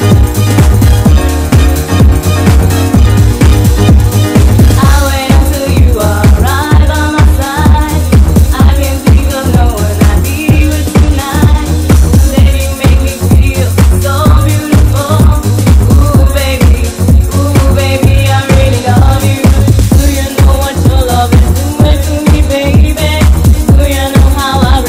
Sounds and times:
Disco: 0.0s - 24.8s.

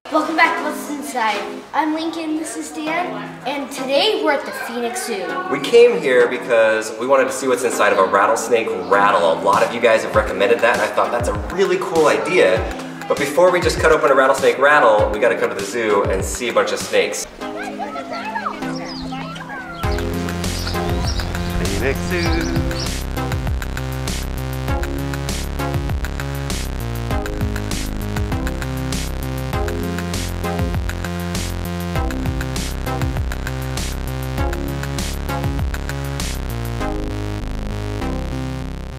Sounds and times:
Music: 0.1s - 38.9s.

